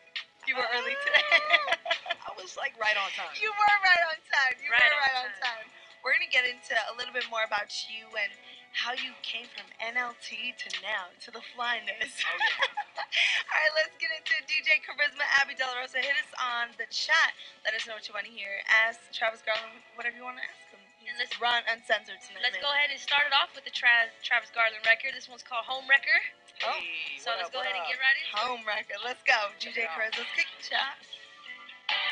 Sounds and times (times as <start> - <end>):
Music: 0.0 - 32.1
Speech: 0.4 - 31.0.